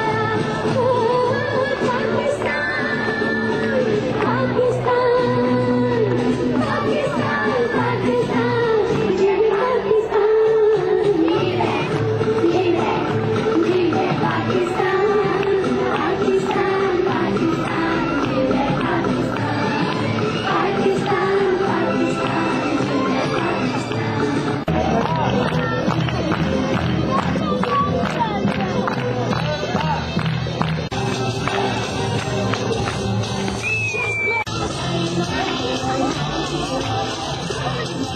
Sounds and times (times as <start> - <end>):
Music: 0.0 - 38.1
Speech: 24.7 - 30.7, 35.0 - 38.1.